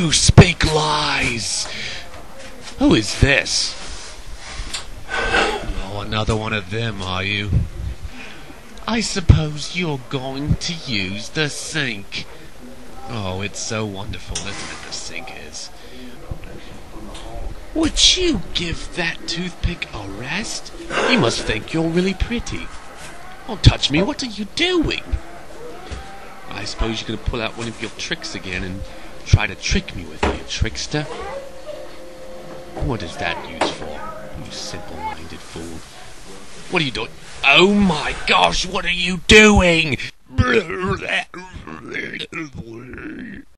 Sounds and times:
Speech: 0:00.0 - 0:03.8, 0:05.6 - 0:07.6, 0:08.8 - 0:12.4, 0:13.0 - 0:22.7, 0:23.5 - 0:25.2, 0:26.5 - 0:31.3, 0:32.8 - 0:35.8, 0:36.7 - 0:43.5.

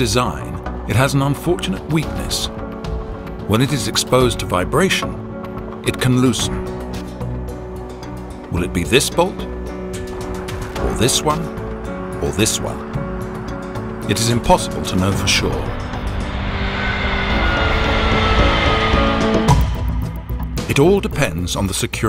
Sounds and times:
Speech: 0:00.0 - 0:02.5, 0:03.5 - 0:05.2, 0:05.8 - 0:06.6, 0:08.5 - 0:09.5, 0:10.8 - 0:11.5, 0:12.2 - 0:12.8, 0:14.1 - 0:15.8, 0:20.6 - 0:22.0
Music: 0:00.0 - 0:22.0.

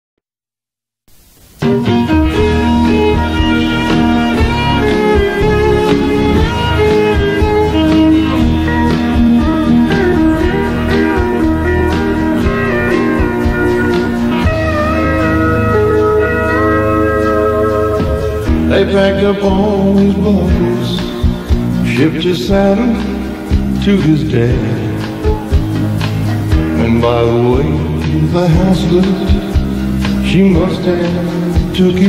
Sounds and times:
Blues: 0:01.3 - 0:32.0.

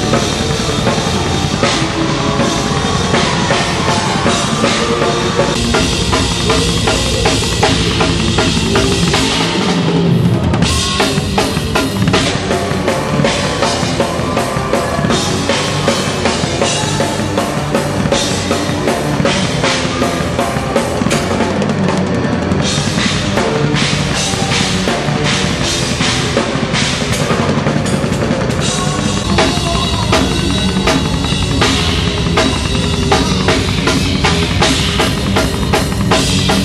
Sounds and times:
Drum: 0:00.0 - 0:36.6
Drum kit: 0:00.0 - 0:36.6.

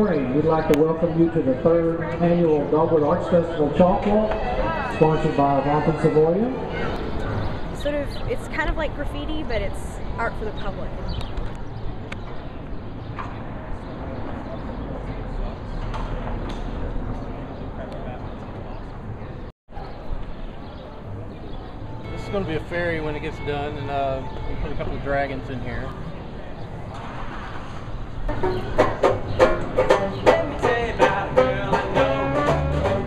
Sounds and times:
Music: 0:22.0 - 0:25.1, 0:28.3 - 0:33.0.

